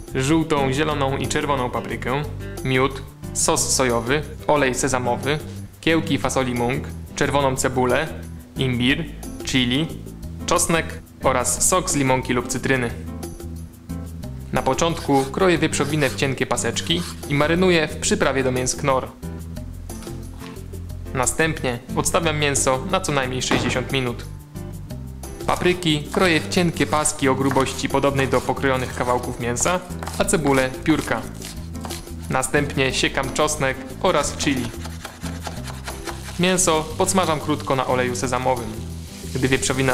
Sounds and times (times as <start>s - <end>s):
Music: 0.0s - 39.9s
Speech: 0.2s - 13.0s, 14.5s - 19.1s, 21.2s - 24.3s, 25.5s - 31.3s, 32.3s - 34.8s, 36.4s - 38.8s, 39.4s - 39.9s.